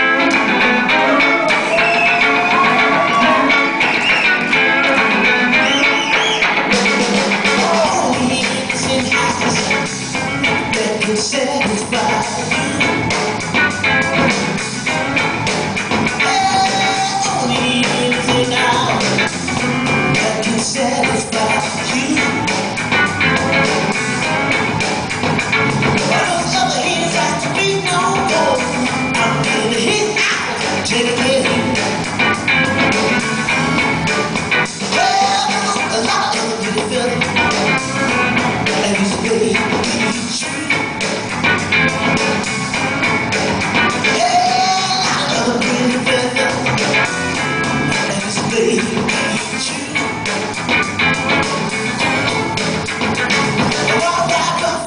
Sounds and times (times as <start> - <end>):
Blues: 0.0 - 54.8.